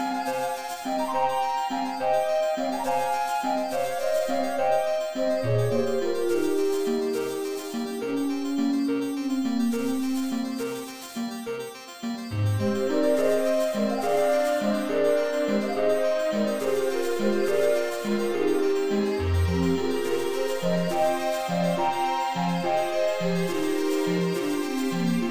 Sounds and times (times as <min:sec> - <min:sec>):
Music: 0:00.0 - 0:25.3.